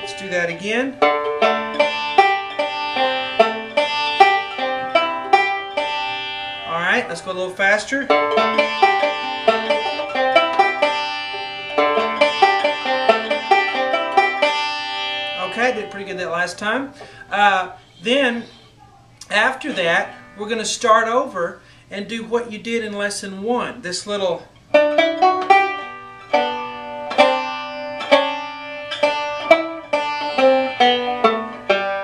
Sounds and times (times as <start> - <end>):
Banjo: 0.0 - 17.1, 24.7 - 32.0
Speech: 0.1 - 1.0, 6.7 - 8.1, 15.4 - 24.5.